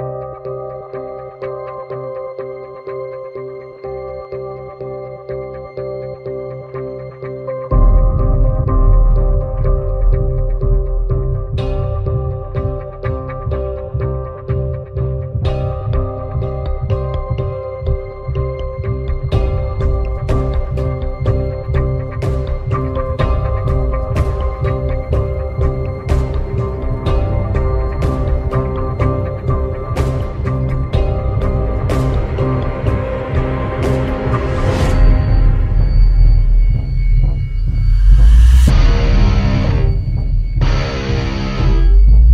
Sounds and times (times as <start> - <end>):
Ambient music: 0.0 - 42.3.